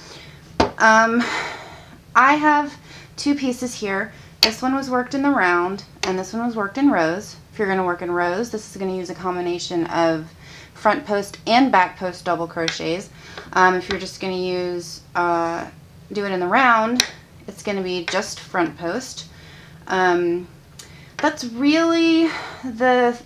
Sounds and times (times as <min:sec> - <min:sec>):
Speech: 0:00.8 - 0:01.4, 0:02.2 - 0:19.3, 0:19.9 - 0:20.5, 0:21.2 - 0:23.2.